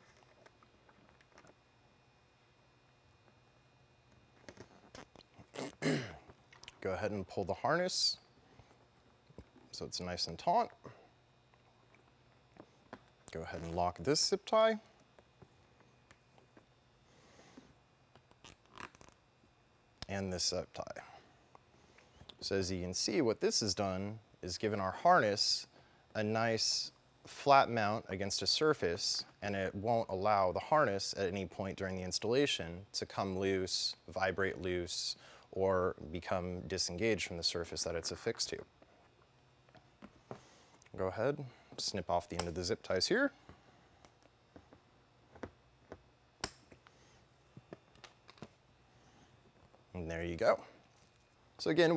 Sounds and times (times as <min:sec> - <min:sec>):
Speech: 0:06.8 - 0:08.3, 0:09.7 - 0:10.8, 0:13.3 - 0:14.9, 0:20.0 - 0:21.1, 0:22.4 - 0:38.7, 0:40.9 - 0:43.4, 0:49.9 - 0:50.8, 0:51.6 - 0:51.9.